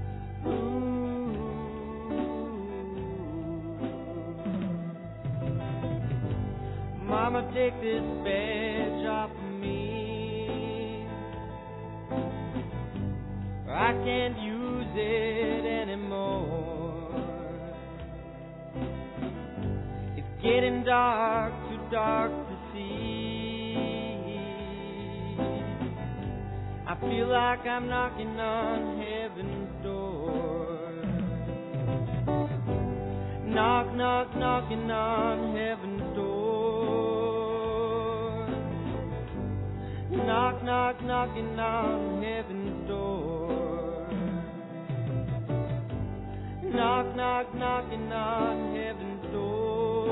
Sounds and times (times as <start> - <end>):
Music: 0.0 - 50.1.